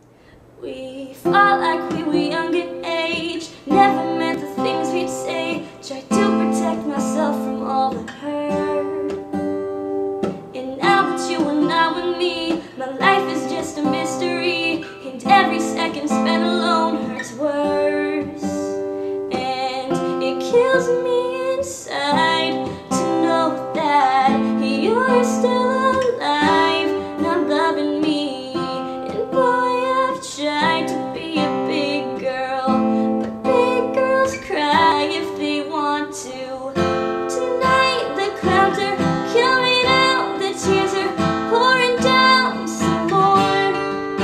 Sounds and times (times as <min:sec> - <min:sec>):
Music: 0:01.2 - 0:44.2.